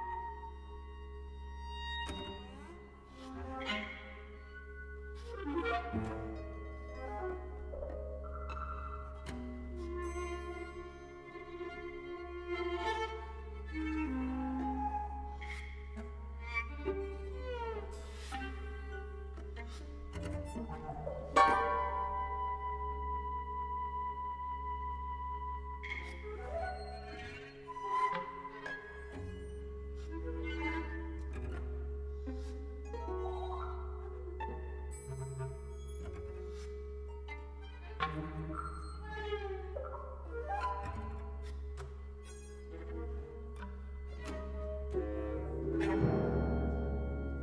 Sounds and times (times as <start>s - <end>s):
Cello: 0.0s - 47.4s
Classical music: 0.0s - 47.4s
Double bass: 0.0s - 47.4s
Orchestra: 0.0s - 47.4s
Violin, fiddle: 0.0s - 47.4s.